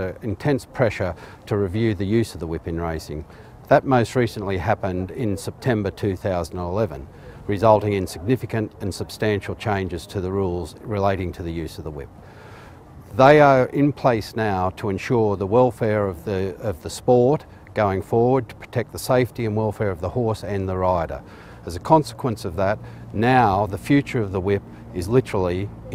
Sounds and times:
Speech: 0.0s - 12.1s, 13.1s - 25.9s.

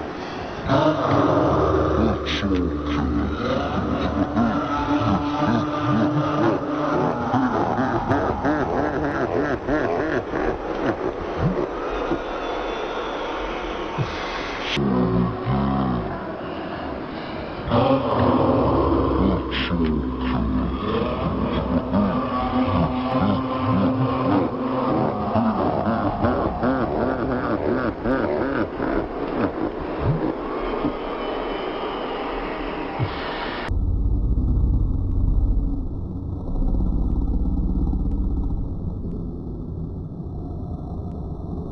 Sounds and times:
Speech: 0.6s - 9.7s, 14.0s - 16.9s, 17.6s - 28.6s.

